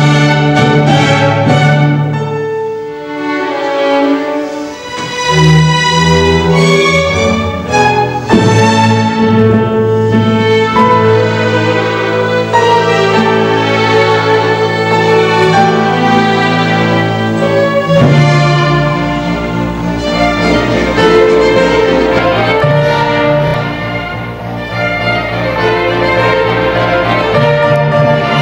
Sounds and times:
Orchestra: 0.0 - 28.4
Violin, fiddle: 0.0 - 28.4.

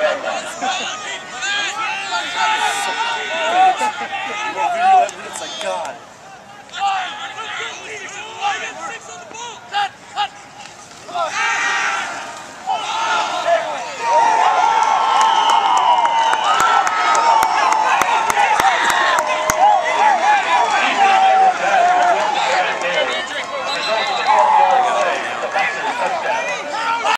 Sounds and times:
Applause: 14.7 - 26.2
Clapping: 15.1 - 19.8, 21.7 - 23.6.

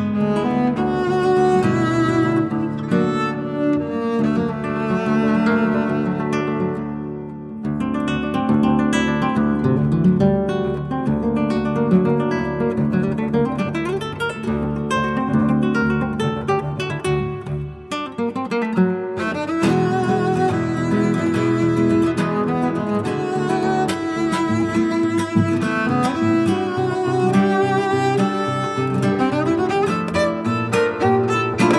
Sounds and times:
Acoustic guitar: 0.0 - 31.7
Cello: 0.0 - 31.7.

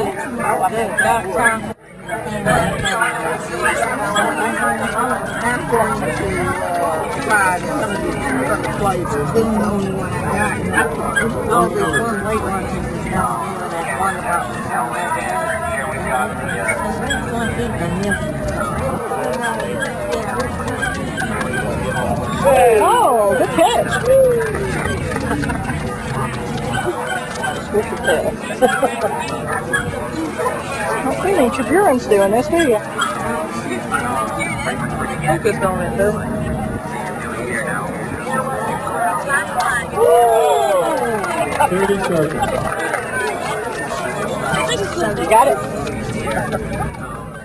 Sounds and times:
Speech: 0.0 - 47.4
Dog: 10.2 - 12.3, 15.0 - 22.5, 23.4 - 34.8.

